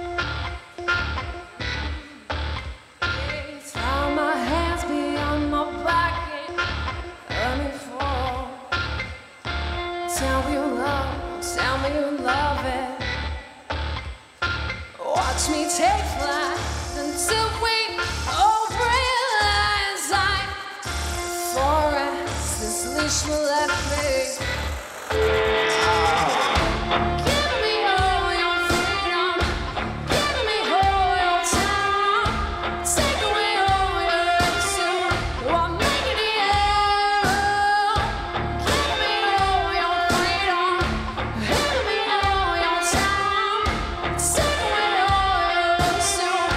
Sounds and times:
Music: 0.0 - 46.5.

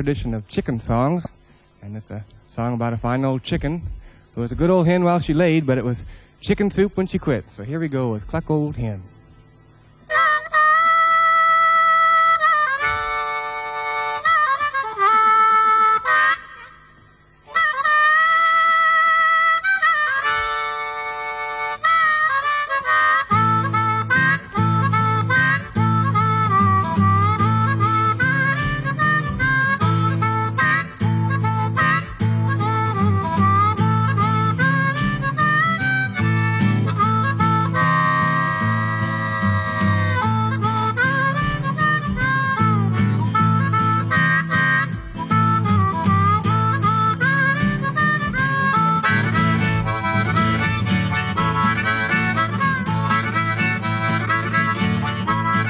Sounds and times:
Music: 0.0 - 55.7.

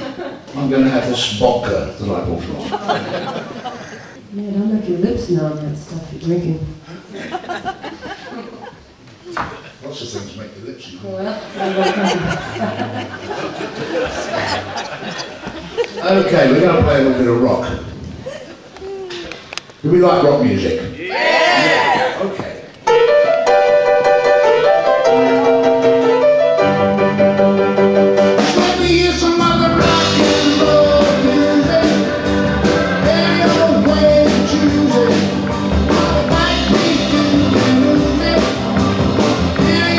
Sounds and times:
Speech: 16.0 - 17.8.

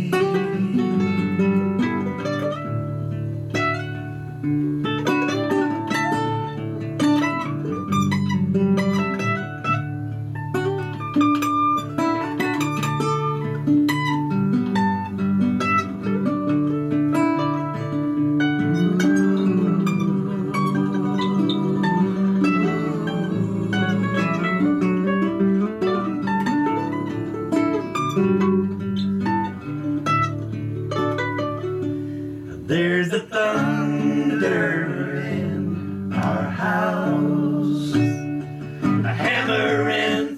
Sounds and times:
Singing: 0.0 - 1.5, 18.6 - 25.6, 32.7 - 38.4, 39.0 - 40.3.

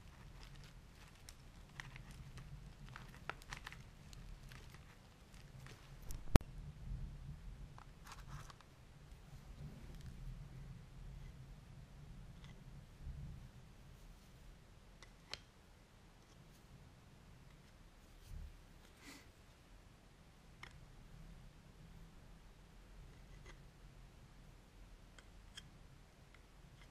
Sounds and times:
Inside, small room: 0.0 - 26.9
Silence: 3.8 - 26.8.

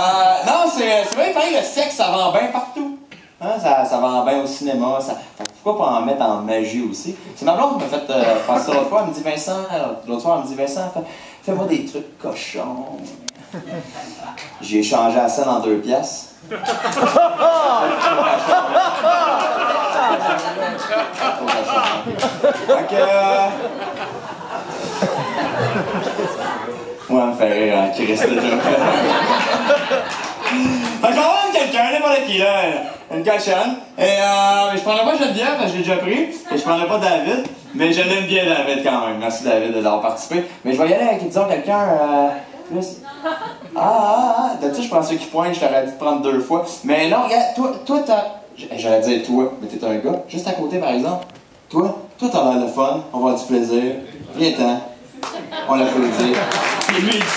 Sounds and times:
Speech: 0.0 - 13.3, 27.1 - 28.9, 31.0 - 43.1, 43.8 - 55.0, 55.6 - 57.3.

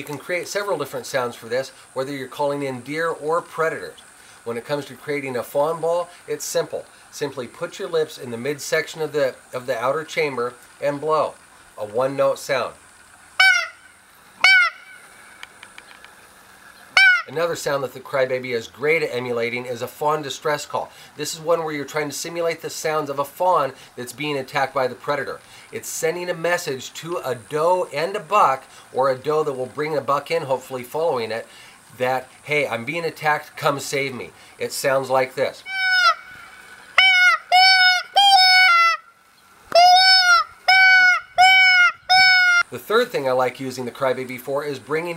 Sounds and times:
Speech: 0.0 - 12.8, 17.3 - 35.7, 42.7 - 45.1.

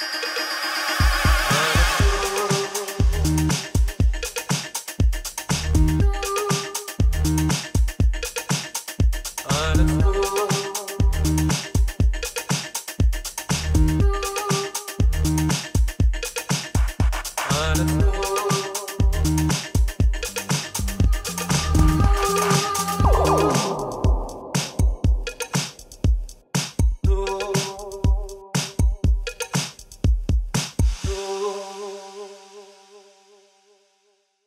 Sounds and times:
Drum machine: 1.0 - 31.2.

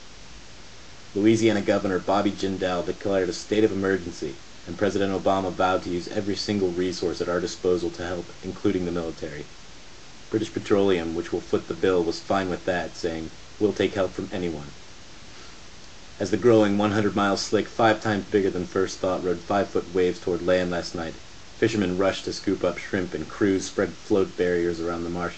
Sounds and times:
Speech: 1.2 - 9.5, 10.3 - 14.8, 16.2 - 25.3.

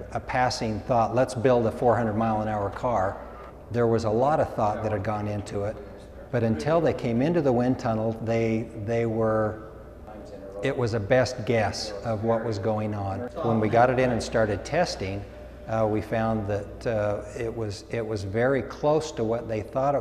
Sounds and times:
Speech: 0.0 - 20.0.

